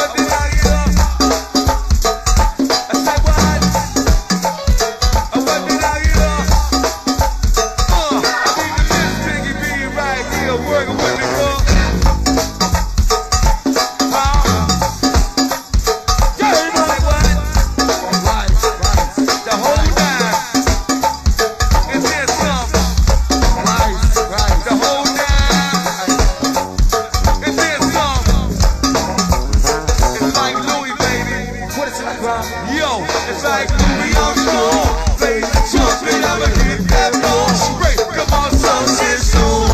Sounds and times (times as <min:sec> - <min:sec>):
Music: 0:00.0 - 0:39.7.